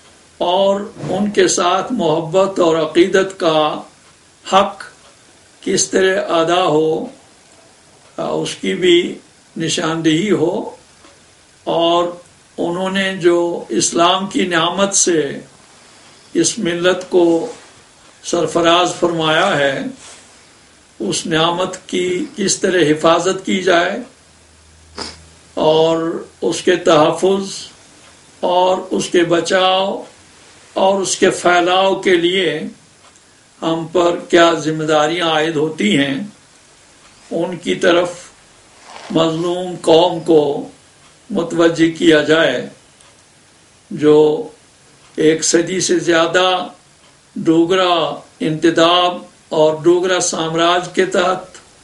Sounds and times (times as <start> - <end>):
Inside, small room: 0.0 - 51.8
Speech: 0.4 - 5.0, 5.6 - 7.2, 8.2 - 10.8, 11.6 - 15.5, 16.4 - 17.6, 18.2 - 20.0, 21.0 - 24.2, 25.6 - 27.8, 28.4 - 30.2, 30.8 - 32.8, 33.6 - 36.4, 37.3 - 38.4, 39.0 - 42.8, 43.9 - 44.6, 45.2 - 46.8, 47.4 - 51.7.